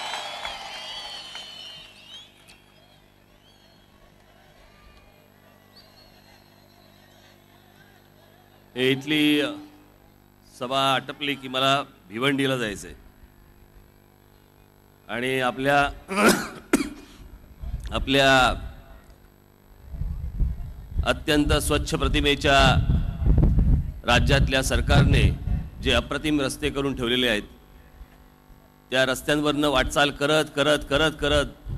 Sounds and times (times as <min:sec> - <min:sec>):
Male speech, man speaking: 0:08.8 - 0:09.7, 0:10.6 - 0:13.0, 0:15.1 - 0:16.0, 0:17.9 - 0:18.8, 0:21.0 - 0:22.9, 0:24.0 - 0:27.5, 0:28.9 - 0:31.6
Narration, monologue: 0:10.4 - 0:13.2, 0:21.0 - 0:23.1, 0:24.0 - 0:31.7.